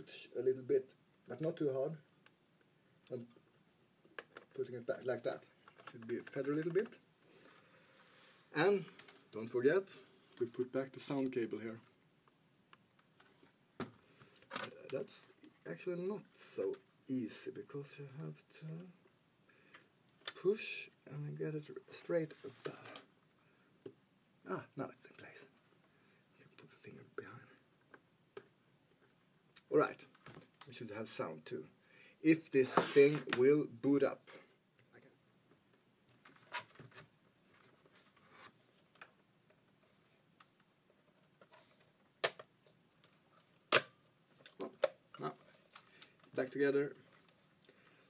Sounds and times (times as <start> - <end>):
Speech: 0.0 - 2.1, 3.1 - 3.4, 4.6 - 7.0, 8.5 - 11.9, 14.6 - 19.0, 20.3 - 23.1, 24.4 - 25.5, 26.4 - 27.6, 29.7 - 30.1, 30.7 - 35.2, 46.4 - 47.0
Inside, small room: 0.0 - 48.1.